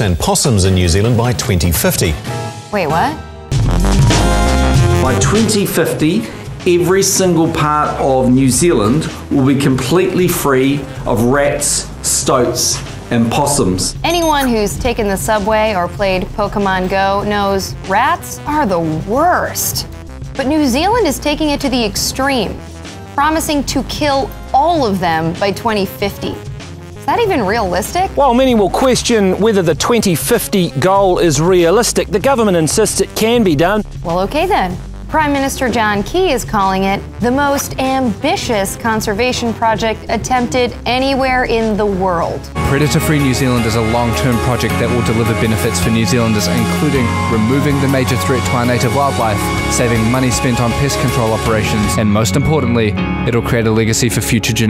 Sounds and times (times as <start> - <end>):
Speech: 0.0 - 2.2, 5.1 - 19.8, 20.4 - 22.6, 27.1 - 54.6
Music: 0.0 - 54.6.